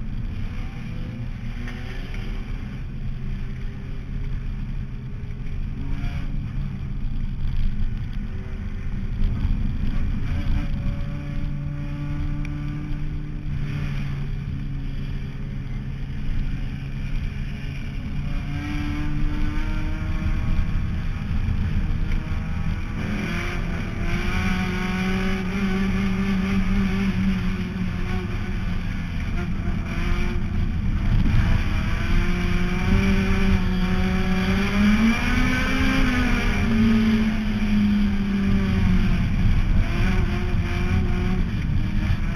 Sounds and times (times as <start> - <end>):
Car: 0.0 - 42.3.